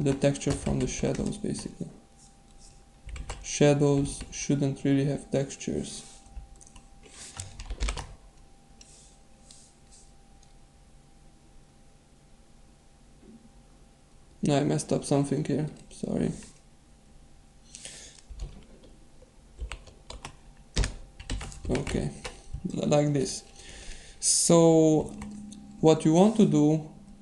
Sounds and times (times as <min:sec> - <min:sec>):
Typewriter: 0:00.0 - 0:01.8, 0:19.6 - 0:22.4
Speech: 0:00.0 - 0:02.0, 0:03.5 - 0:06.1, 0:14.4 - 0:16.6, 0:21.7 - 0:23.5, 0:24.2 - 0:25.2, 0:25.8 - 0:26.9.